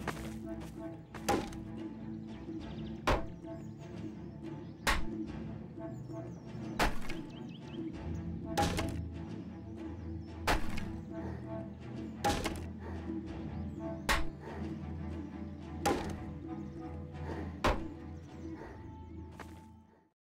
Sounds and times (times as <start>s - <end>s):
Chop: 1.2s - 1.6s, 3.1s - 3.3s, 4.9s - 5.1s, 6.8s - 7.3s, 8.6s - 9.0s, 10.5s - 11.0s, 12.2s - 12.7s, 14.1s - 14.3s, 15.8s - 16.3s, 17.6s - 17.9s.